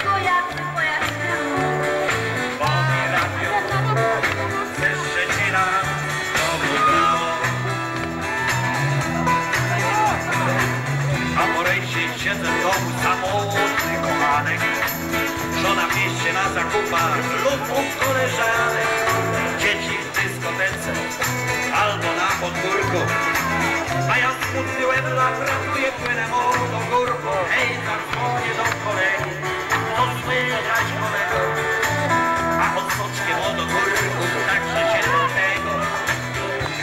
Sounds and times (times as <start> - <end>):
Music: 0.0 - 36.8.